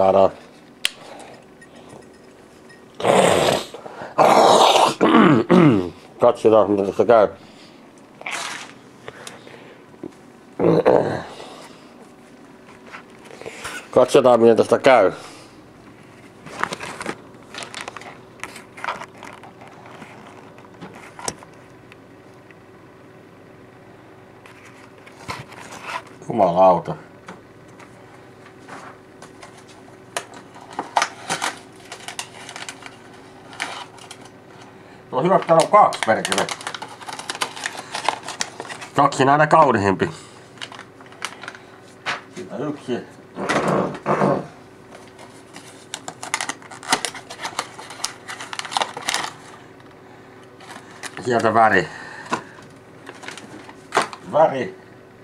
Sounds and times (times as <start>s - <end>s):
Speech: 0.0s - 0.4s, 6.2s - 7.4s, 13.9s - 15.2s, 26.2s - 27.1s, 35.1s - 36.5s, 39.0s - 40.2s, 42.4s - 43.2s, 51.2s - 51.9s, 54.3s - 54.8s.